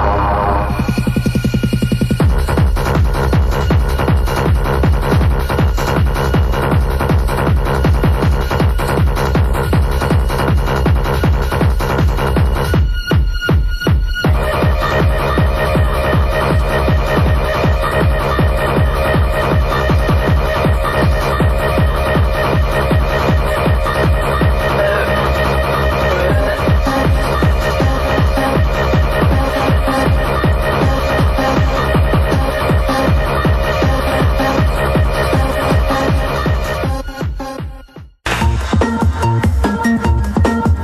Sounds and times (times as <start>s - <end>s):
Techno: 0.0s - 40.8s.